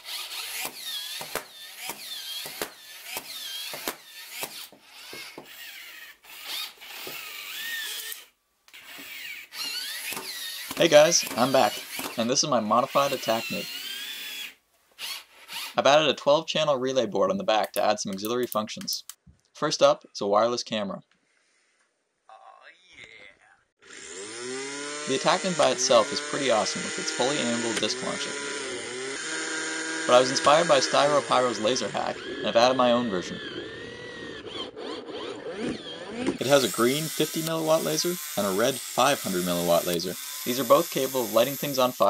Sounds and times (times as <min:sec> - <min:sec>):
Ratchet, pawl: 0:00.0 - 0:12.2.